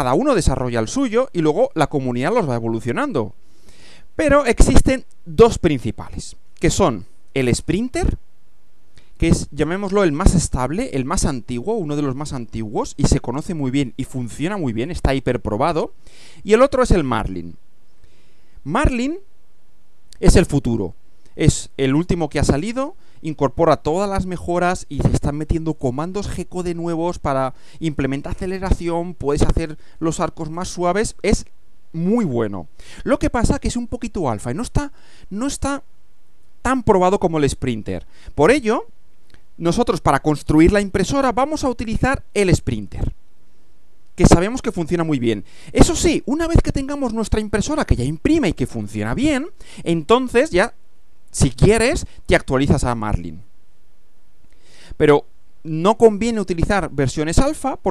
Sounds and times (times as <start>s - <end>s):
Speech: 0.0s - 3.4s, 4.2s - 8.2s, 9.2s - 17.6s, 18.6s - 19.3s, 20.2s - 35.8s, 36.7s - 38.9s, 39.6s - 43.2s, 44.2s - 53.4s, 55.0s - 57.9s.